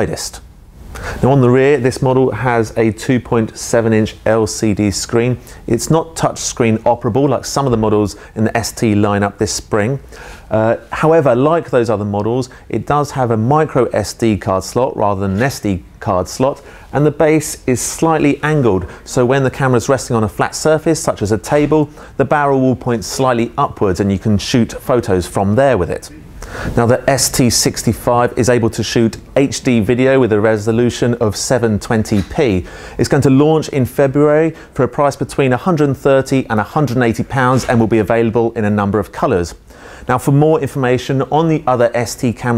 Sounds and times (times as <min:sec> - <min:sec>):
Speech: 0:00.0 - 0:00.4, 0:01.2 - 0:42.5.